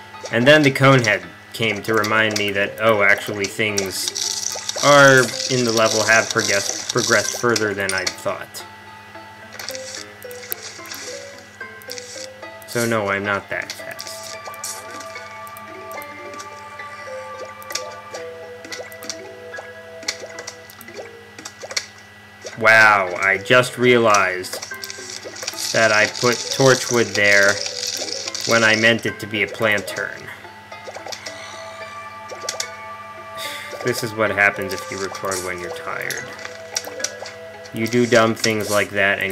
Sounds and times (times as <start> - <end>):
Music: 0.0 - 21.6, 22.8 - 39.3
Speech: 0.4 - 4.1, 4.8 - 8.6, 12.7 - 14.2, 22.6 - 24.6, 25.8 - 27.6, 28.5 - 30.4, 33.8 - 36.3, 37.8 - 39.3.